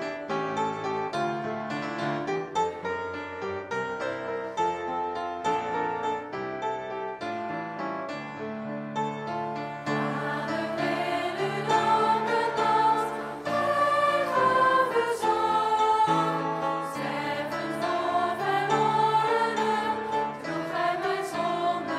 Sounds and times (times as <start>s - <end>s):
Choir: 9.8s - 21.9s.